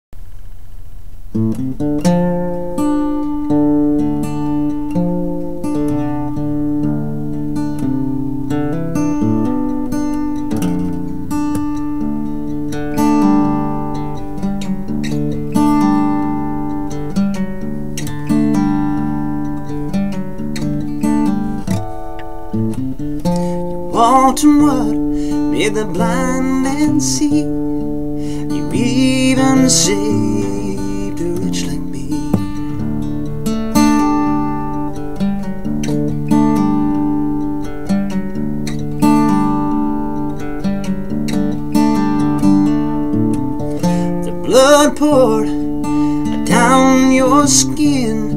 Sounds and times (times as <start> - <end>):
Guitar: 0.2 - 48.3
Country: 1.3 - 48.3.